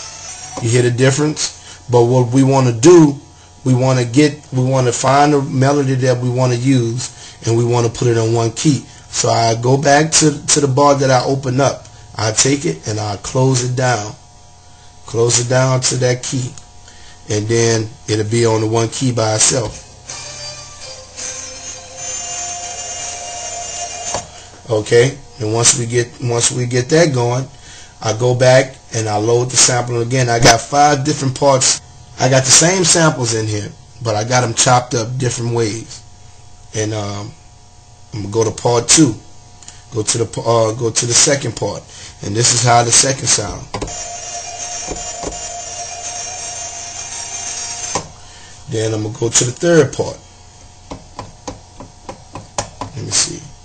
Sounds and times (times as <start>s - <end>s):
Inside, small room: 0.0s - 53.6s
Speech: 0.6s - 14.2s, 15.1s - 16.6s, 17.3s - 19.8s, 24.7s - 36.1s, 36.7s - 37.4s, 38.1s - 39.3s, 39.9s - 43.8s, 48.7s - 50.2s, 52.9s - 53.6s.